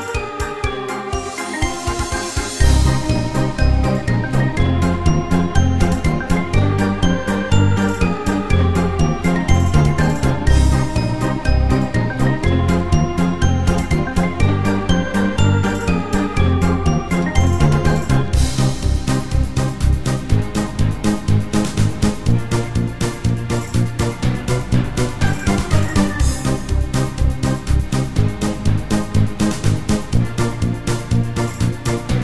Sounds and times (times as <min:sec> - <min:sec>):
Theme music: 0:00.0 - 0:32.2.